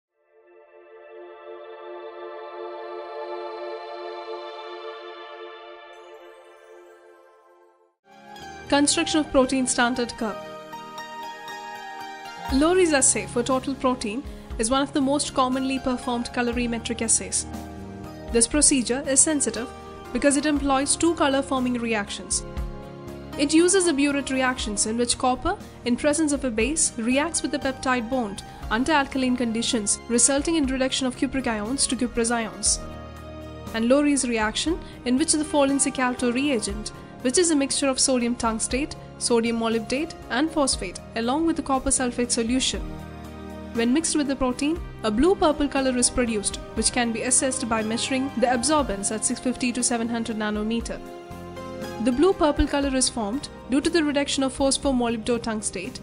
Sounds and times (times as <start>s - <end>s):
Ambient music: 0.1s - 56.0s.